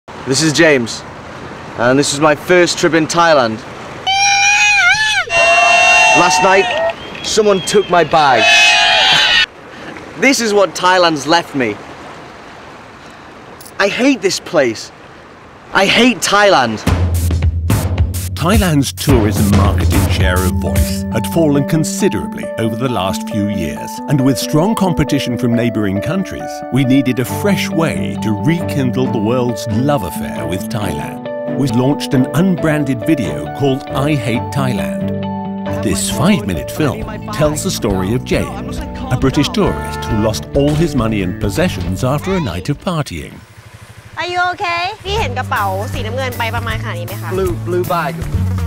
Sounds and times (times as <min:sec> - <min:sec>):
Outside, rural or natural: 0:00.1 - 0:17.4, 0:34.9 - 0:48.6
Speech: 0:00.3 - 0:01.0, 0:01.8 - 0:03.7, 0:07.3 - 0:08.5, 0:10.2 - 0:11.8, 0:13.8 - 0:14.9, 0:15.7 - 0:16.9, 0:18.4 - 0:35.0, 0:35.8 - 0:43.4, 0:44.2 - 0:48.2.